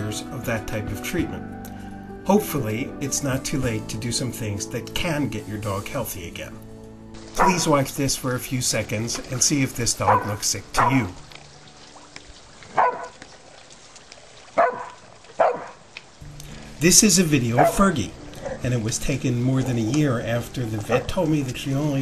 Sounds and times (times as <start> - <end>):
Dog: 7.4 - 7.7, 10.0 - 11.1, 12.7 - 13.2, 14.6 - 15.8, 17.6 - 17.8, 20.8 - 21.2.